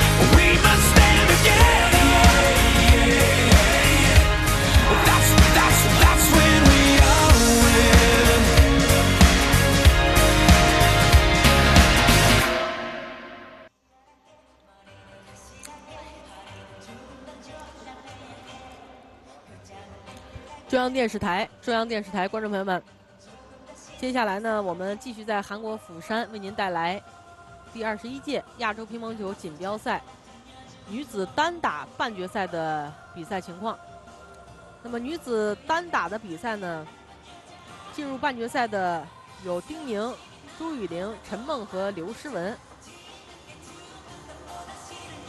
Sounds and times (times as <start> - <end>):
Music: 0.0 - 45.2
Speech: 20.7 - 22.8, 23.9 - 27.0, 27.8 - 30.0, 30.8 - 33.8, 34.9 - 36.9, 37.9 - 42.6.